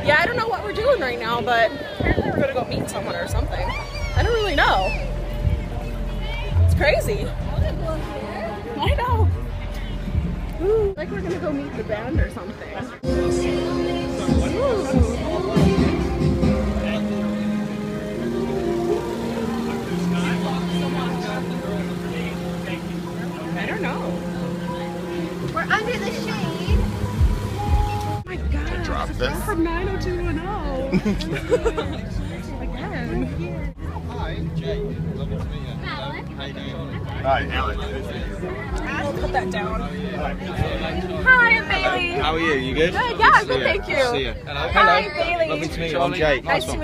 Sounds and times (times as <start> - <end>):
Music: 0.0 - 46.8.